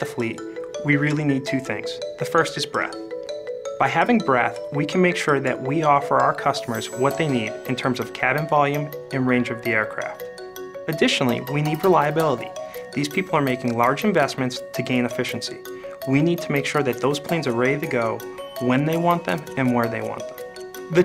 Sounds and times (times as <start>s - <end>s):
Speech: 0.0s - 3.0s, 3.8s - 10.2s, 10.9s - 20.2s
Music: 0.0s - 21.0s.